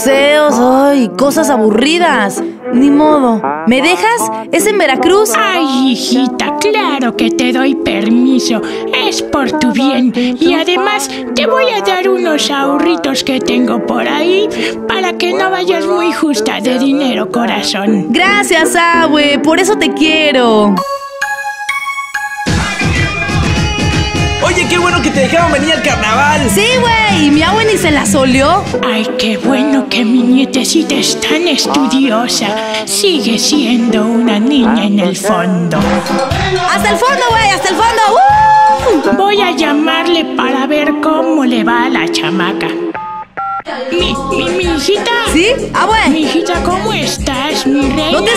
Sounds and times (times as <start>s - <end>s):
Speech: 0.0s - 8.2s, 9.0s - 20.8s, 24.4s - 28.6s, 43.7s - 48.3s
Music: 0.0s - 48.3s.